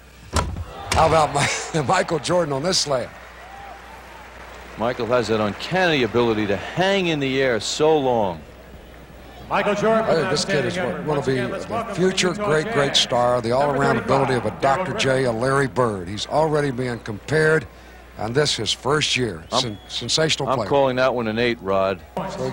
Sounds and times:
Speech: 0:09.5 - 0:22.5.

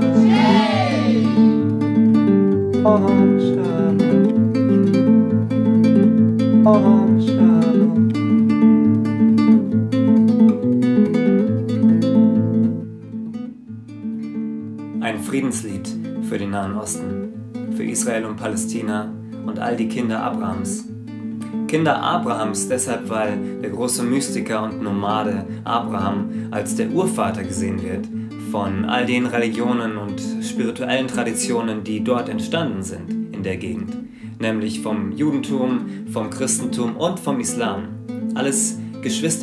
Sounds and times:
Music: 0:00.0 - 0:39.4
Speech: 0:00.2 - 0:01.4, 0:15.0 - 0:17.2, 0:17.8 - 0:20.9, 0:21.7 - 0:39.4.

